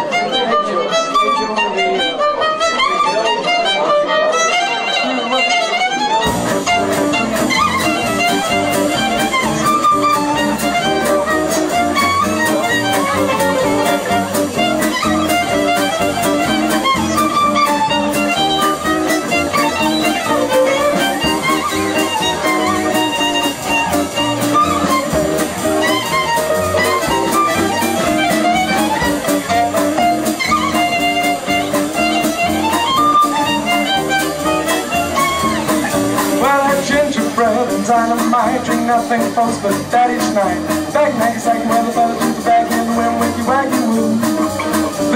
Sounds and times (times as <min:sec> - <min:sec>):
Violin, fiddle: 0:00.0 - 0:45.1.